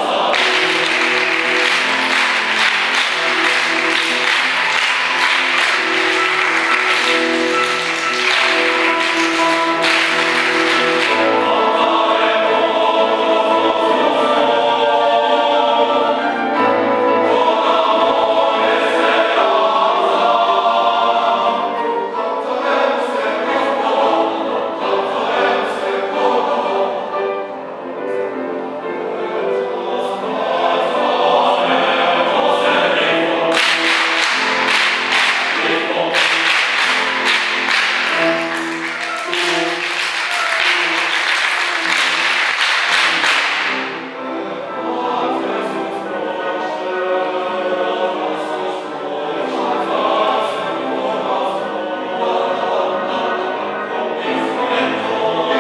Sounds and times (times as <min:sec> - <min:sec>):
Choir: 0:00.0 - 0:55.6.